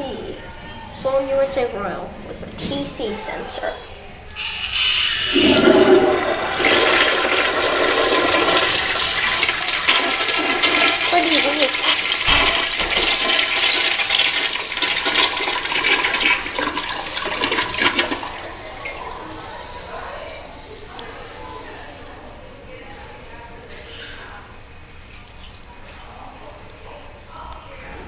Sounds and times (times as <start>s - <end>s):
Water: 4.4s - 28.0s
Toilet flush: 4.7s - 22.3s.